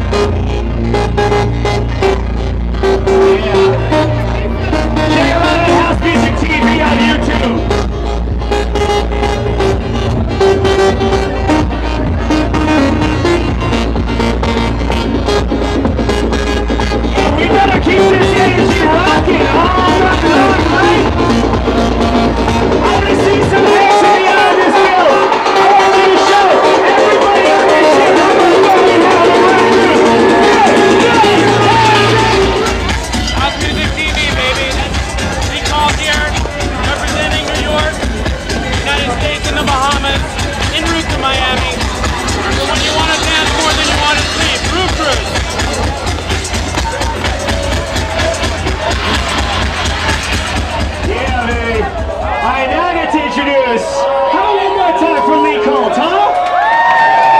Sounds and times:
House music: 0.0s - 57.3s.

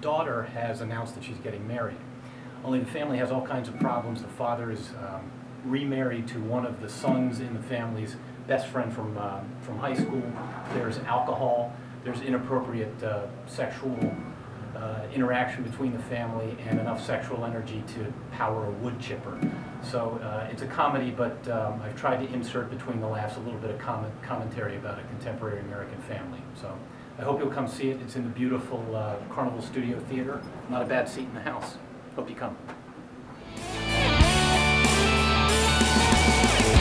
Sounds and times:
Male speech, man speaking: 0.0s - 2.0s, 2.6s - 14.2s, 14.8s - 32.6s.

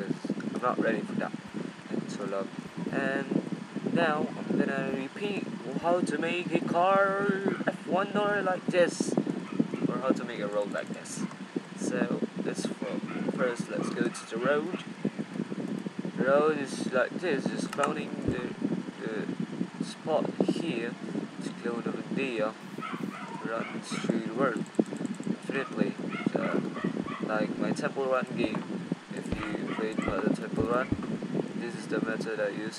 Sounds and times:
Speech: 0.0s - 3.4s, 4.0s - 9.2s, 9.9s - 14.8s, 16.2s - 22.6s, 23.4s - 24.6s, 25.4s - 26.6s, 27.3s - 30.9s, 31.6s - 32.7s.

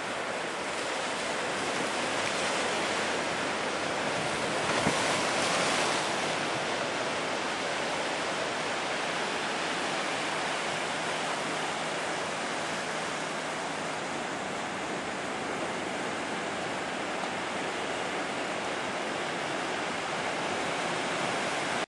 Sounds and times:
Waves, surf: 0.0s - 21.8s
Wind: 0.0s - 21.8s.

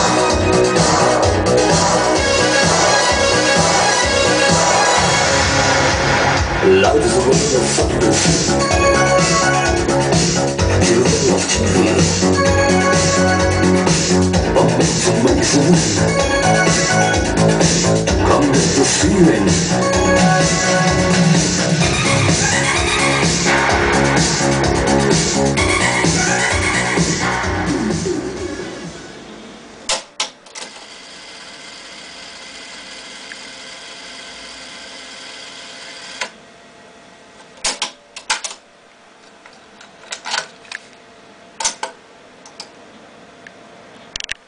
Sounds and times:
Music: 0.0s - 29.2s.

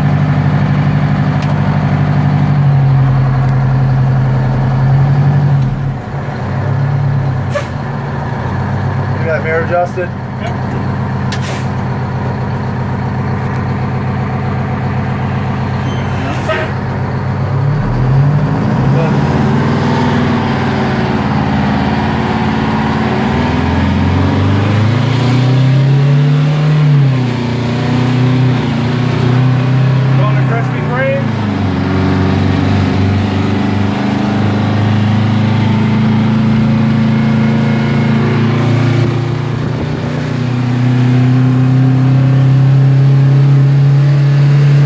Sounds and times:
Truck: 0.0s - 44.8s
Speech: 9.2s - 10.8s, 30.2s - 31.3s.

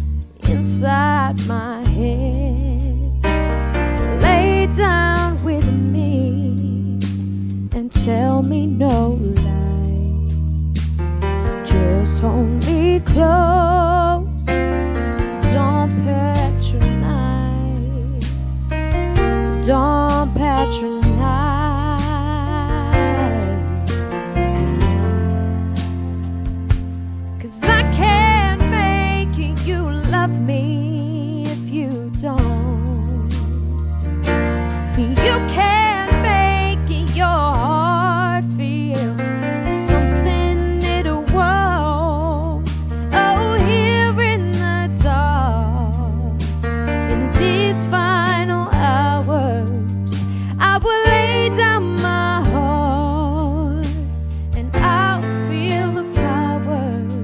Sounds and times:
Music: 0.0s - 57.2s
Female singing: 0.5s - 3.2s, 4.2s - 7.0s, 7.8s - 10.2s, 11.7s - 14.3s, 15.4s - 18.2s, 19.6s - 23.8s, 27.4s - 33.4s, 35.0s - 39.2s, 39.8s - 46.3s, 47.1s - 57.2s.

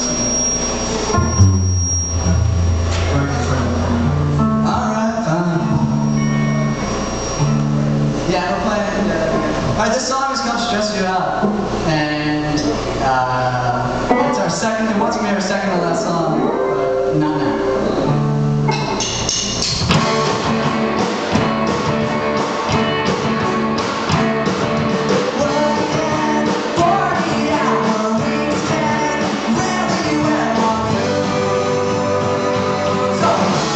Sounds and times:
Music: 0.0s - 33.7s
Speech: 3.0s - 4.0s, 8.3s - 18.2s.

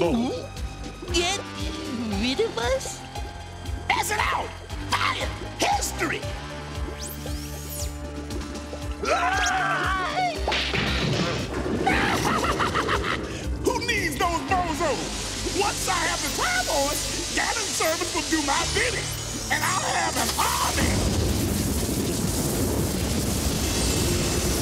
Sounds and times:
Music: 0.0s - 24.6s
Speech: 13.6s - 15.0s, 15.6s - 21.0s.

